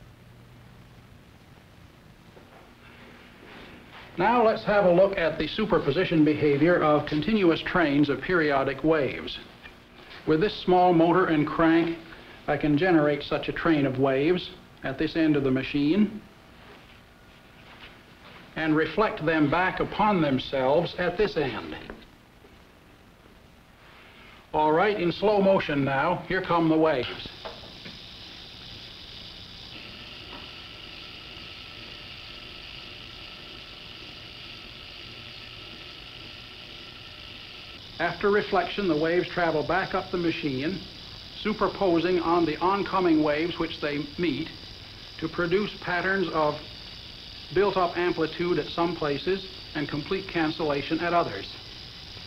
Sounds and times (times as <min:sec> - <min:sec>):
Speech: 0:04.2 - 0:09.5, 0:10.3 - 0:16.3, 0:18.6 - 0:22.0, 0:24.5 - 0:27.4, 0:38.0 - 0:44.6, 0:45.2 - 0:46.7, 0:47.5 - 0:51.6.